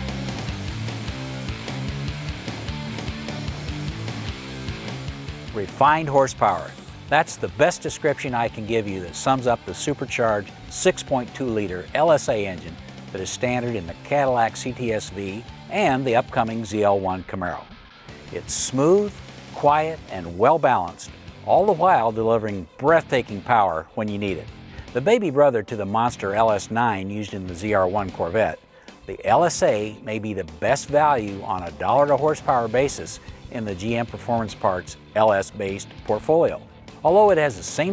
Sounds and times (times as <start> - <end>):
Music: 0.0 - 37.9
Speech: 5.5 - 17.7, 18.3 - 37.9.